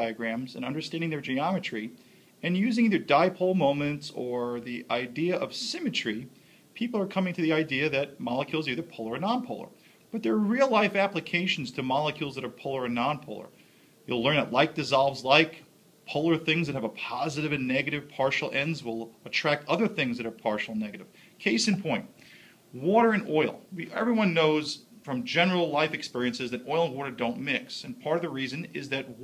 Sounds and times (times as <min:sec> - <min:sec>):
Speech: 0:00.0 - 0:29.2.